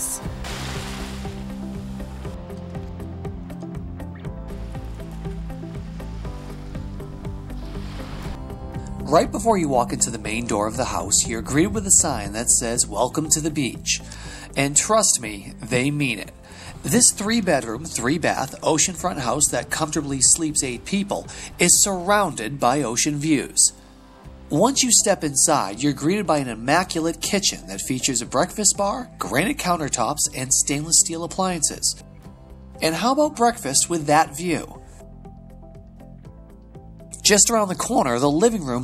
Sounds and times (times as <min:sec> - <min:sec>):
Speech: 0:00.0 - 0:00.3, 0:09.1 - 0:23.8, 0:24.5 - 0:32.0, 0:32.8 - 0:34.8, 0:37.2 - 0:38.8
Music: 0:00.0 - 0:38.8.